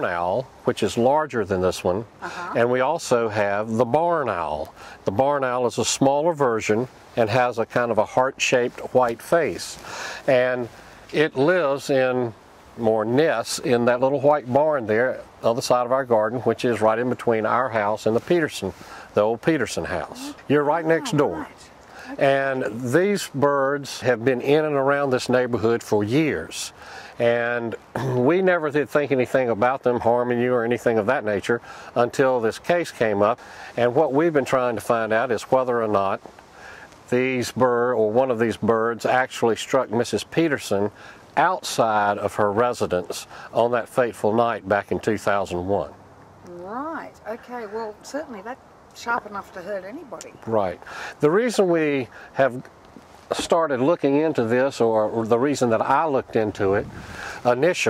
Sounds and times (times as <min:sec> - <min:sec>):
Speech: 0:00.0 - 0:36.2, 0:37.1 - 0:52.7, 0:53.3 - 0:56.9, 0:57.5 - 0:57.9.